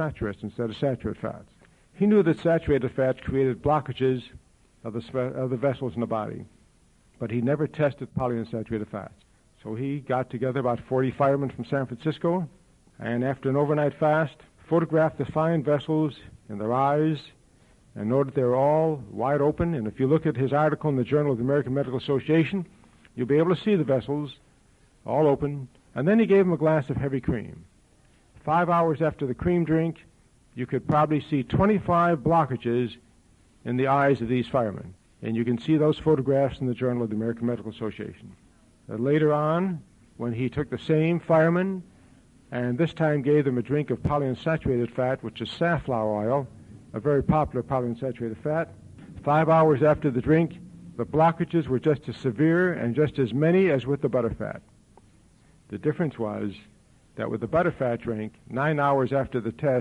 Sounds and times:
Male speech, man speaking: 0.0s - 6.5s, 7.2s - 17.4s, 18.0s - 24.4s, 25.1s - 27.7s, 28.4s - 33.0s, 33.6s - 41.9s, 42.5s - 54.7s, 55.7s - 59.8s
Narration, monologue: 0.0s - 59.8s.

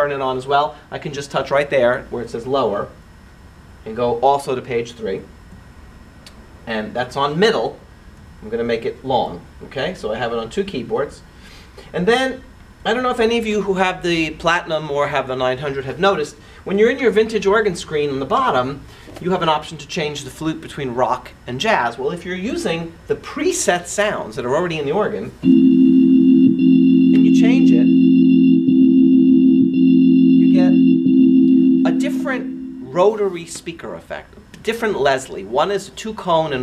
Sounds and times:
Hammond organ: 25.4s - 33.4s.

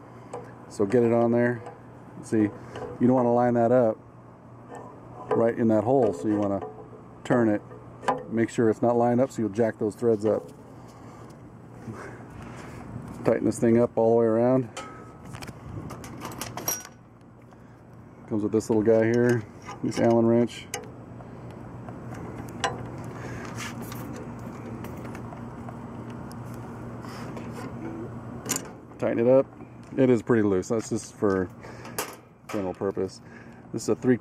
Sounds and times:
Speech: 0.7s - 4.0s, 5.3s - 6.6s, 7.2s - 7.6s, 8.3s - 10.5s, 13.2s - 14.7s, 18.3s - 20.8s, 29.0s - 31.5s, 32.5s - 34.2s.

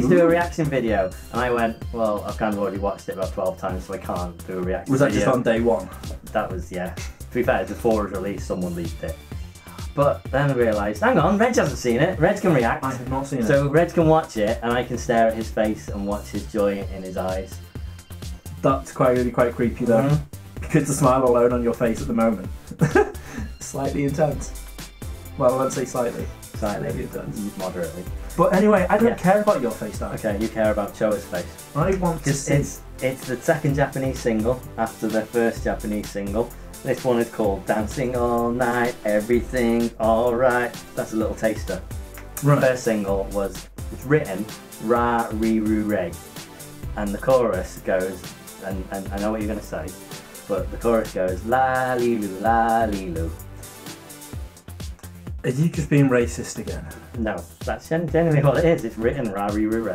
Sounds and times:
Speech: 0.0s - 9.2s, 10.0s - 17.6s, 18.6s - 22.5s, 23.6s - 24.6s, 25.4s - 41.8s, 42.4s - 46.2s, 46.9s - 53.4s, 55.4s - 59.9s
Music: 0.0s - 59.9s.

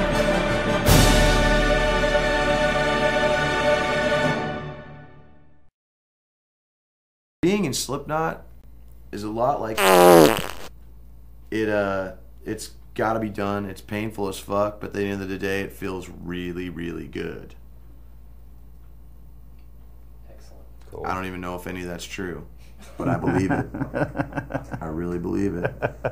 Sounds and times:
Music: 0.0s - 5.7s
Speech: 7.4s - 8.5s, 9.1s - 9.8s, 11.5s - 17.6s, 20.2s - 23.7s, 24.7s - 25.9s.

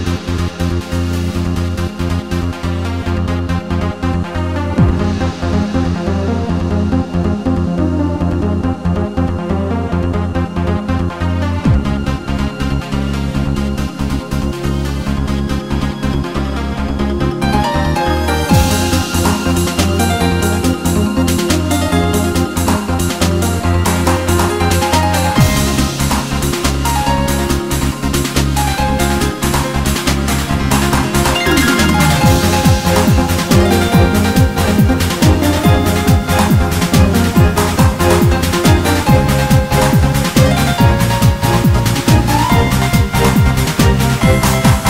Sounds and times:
Music: 0.0s - 44.8s.

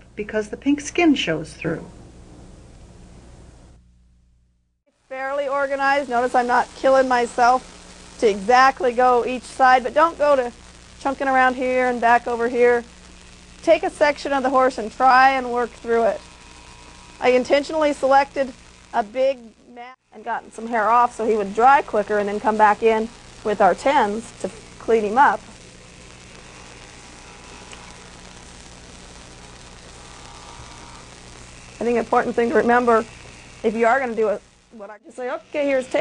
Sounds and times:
Speech: 0.2s - 1.9s, 5.1s - 7.6s, 8.2s - 12.9s, 13.6s - 16.2s, 17.2s - 25.4s, 31.8s - 36.0s.

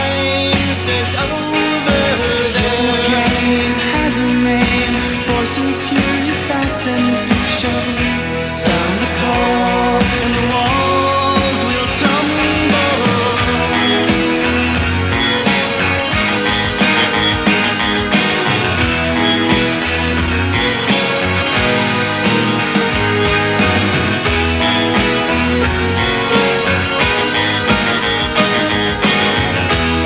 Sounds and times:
Grunge: 0.0s - 30.0s.

